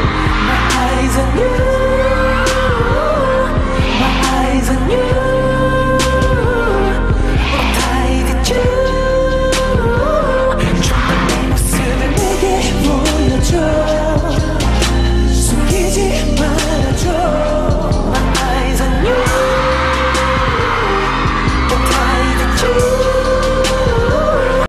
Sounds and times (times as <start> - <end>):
Music: 0.0 - 24.6.